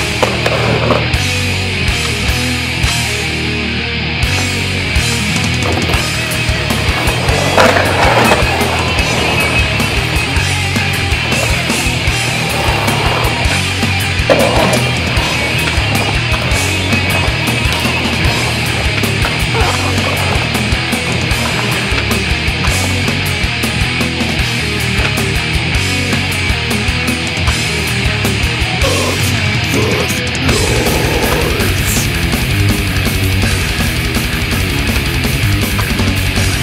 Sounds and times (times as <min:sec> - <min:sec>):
Skateboard: 0:00.0 - 0:02.4, 0:05.3 - 0:28.4, 0:30.5 - 0:36.6
Music: 0:00.0 - 0:36.6.